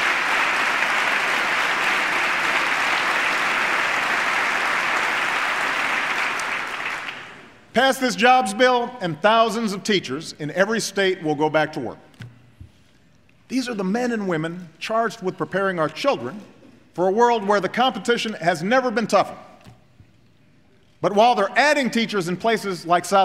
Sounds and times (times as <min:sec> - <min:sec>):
Male speech, man speaking: 0:07.8 - 0:12.0, 0:13.5 - 0:19.4, 0:21.0 - 0:23.2.